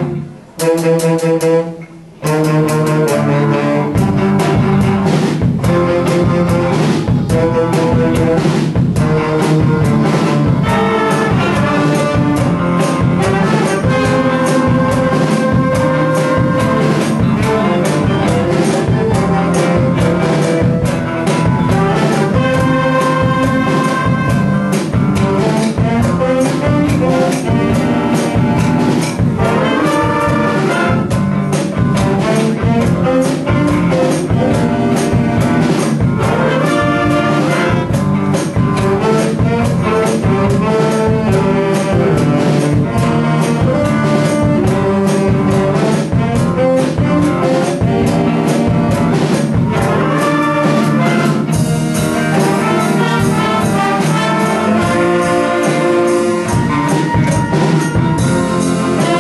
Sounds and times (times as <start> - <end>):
Jazz: 0.0 - 59.2
Orchestra: 0.0 - 59.2.